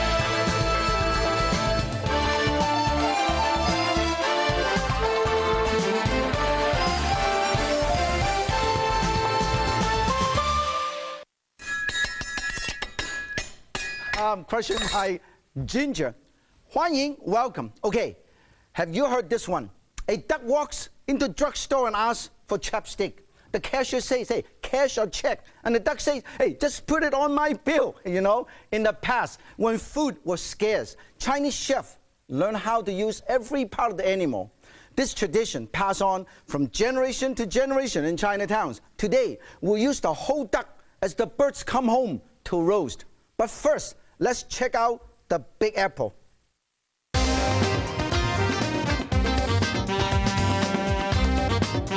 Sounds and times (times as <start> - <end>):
Speech: 14.2 - 18.2, 18.8 - 46.2.